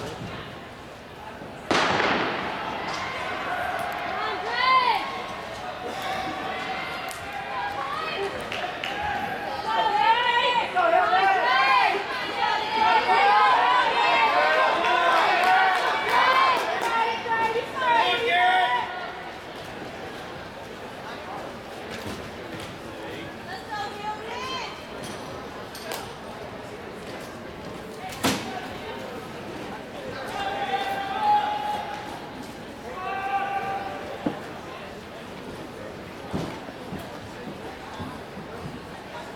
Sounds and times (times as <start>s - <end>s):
Run: 2.3s - 23.5s, 29.0s - 39.3s.